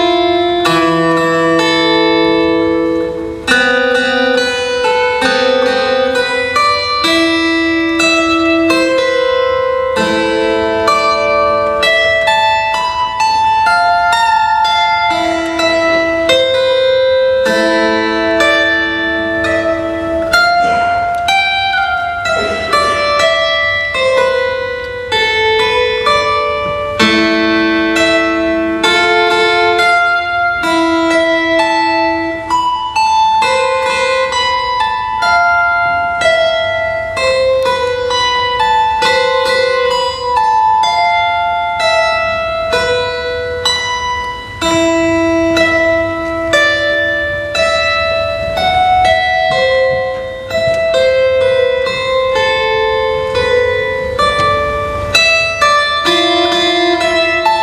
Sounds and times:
Guitar: 0.0s - 57.6s.

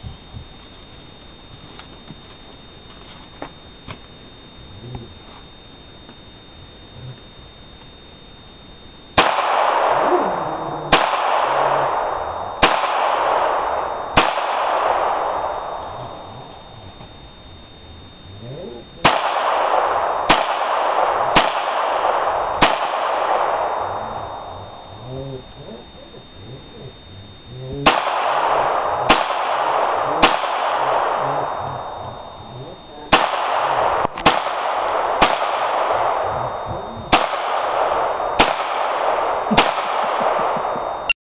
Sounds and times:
Gunshot, gunfire: 9.2s - 10.1s, 12.6s - 13.6s, 14.2s - 15.3s, 19.0s - 23.8s, 33.1s - 36.2s, 37.1s - 40.7s.

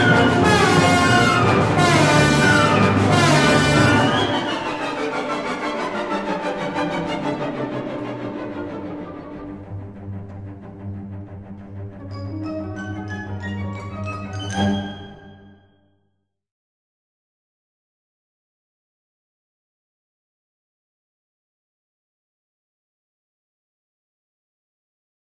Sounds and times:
Music: 0.0s - 16.3s.

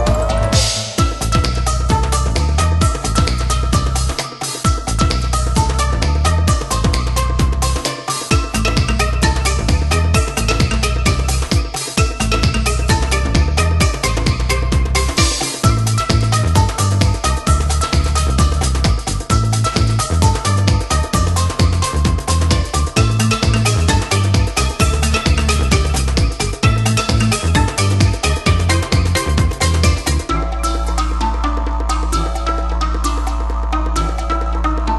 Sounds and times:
Independent music: 0.0s - 34.9s.

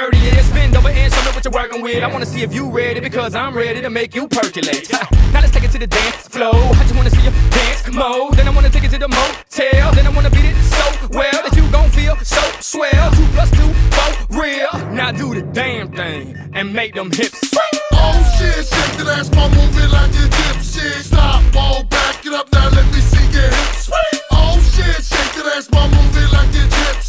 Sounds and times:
Rapping: 0.0s - 27.0s.

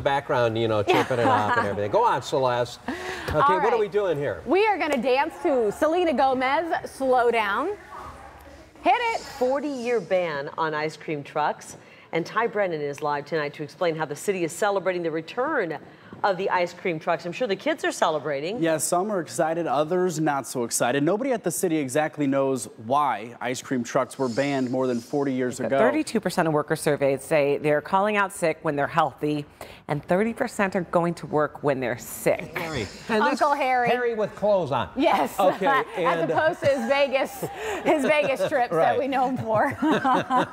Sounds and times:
Female speech, woman speaking: 3.4s - 7.8s, 8.8s - 18.6s, 25.8s - 34.1s, 35.0s - 39.8s.

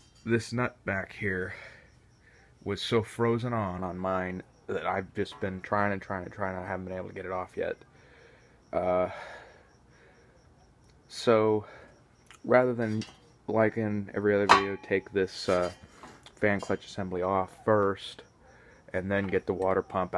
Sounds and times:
Speech: 0.3s - 1.7s, 2.6s - 7.8s, 11.1s - 11.7s, 12.4s - 15.8s, 16.4s - 18.2s, 18.9s - 20.1s.

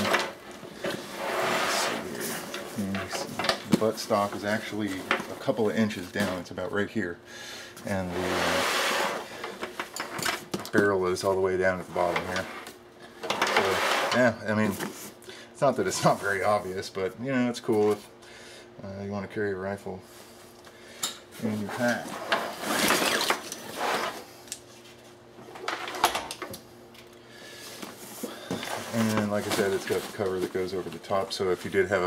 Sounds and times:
Inside, small room: 0.0s - 32.0s
Speech: 1.7s - 7.2s, 7.8s - 8.6s, 10.7s - 12.5s, 13.5s - 14.9s, 15.6s - 18.1s, 18.8s - 20.1s, 21.4s - 22.2s, 28.9s - 32.0s.

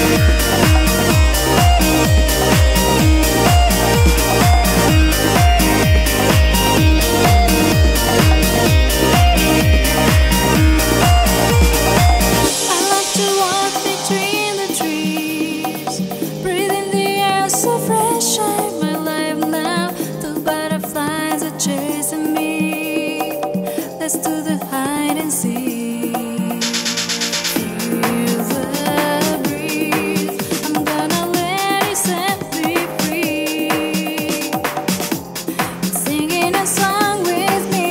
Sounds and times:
Music: 0.0s - 37.9s.

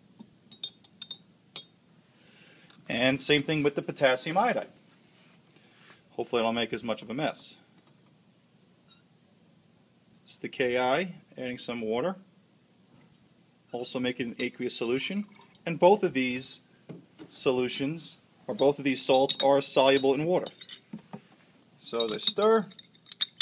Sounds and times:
Speech: 2.9s - 4.8s, 6.1s - 7.7s, 10.3s - 12.3s, 13.7s - 16.7s, 17.3s - 20.6s, 21.8s - 22.7s
Liquid: 15.1s - 15.7s.

